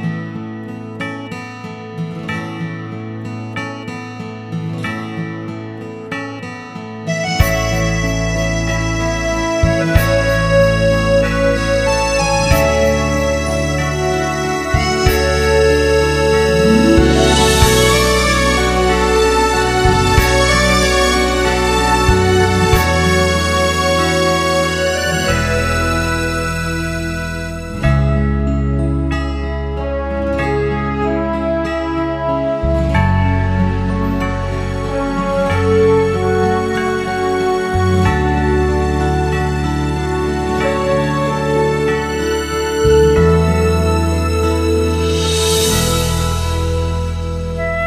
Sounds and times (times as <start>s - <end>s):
Music: 0.0s - 47.8s.